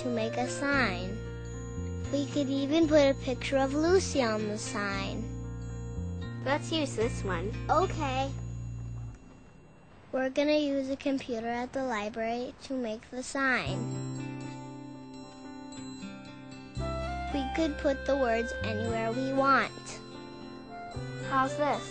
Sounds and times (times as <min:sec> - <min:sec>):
Speech: 0:00.0 - 0:01.2, 0:02.1 - 0:05.3, 0:06.4 - 0:08.4, 0:10.2 - 0:13.8, 0:17.3 - 0:20.0, 0:21.3 - 0:21.9
Music: 0:00.0 - 0:09.8, 0:13.7 - 0:21.9.